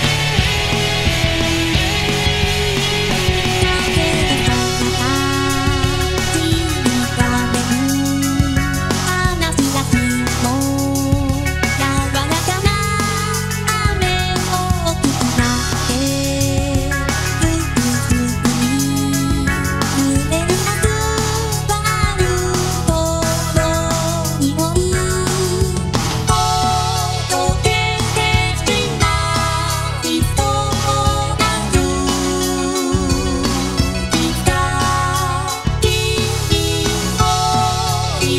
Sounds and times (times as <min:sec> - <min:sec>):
Pop music: 0:00.0 - 0:38.3.